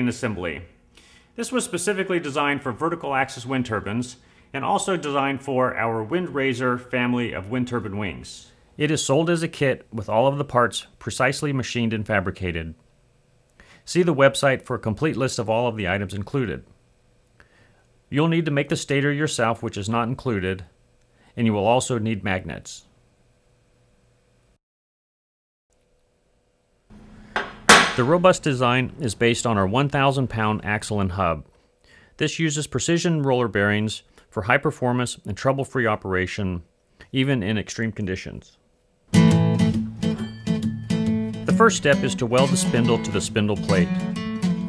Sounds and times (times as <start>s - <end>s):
Speech: 0.0s - 0.8s, 1.4s - 12.8s, 13.9s - 16.8s, 18.1s - 20.8s, 21.4s - 22.9s, 28.0s - 31.5s, 32.2s - 38.6s, 41.5s - 44.0s.